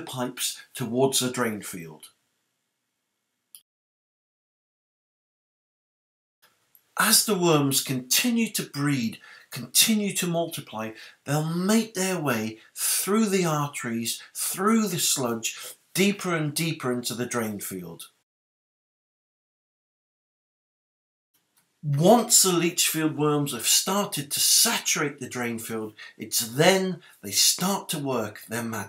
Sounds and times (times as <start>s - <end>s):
Speech: 0.0s - 2.1s, 7.0s - 18.2s, 21.8s - 28.8s.